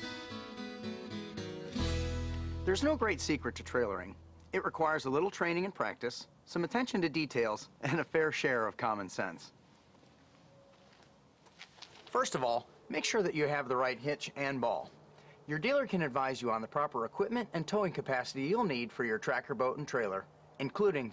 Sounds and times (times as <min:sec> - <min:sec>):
Speech: 0:02.7 - 0:09.6, 0:12.1 - 0:14.9, 0:15.5 - 0:21.1.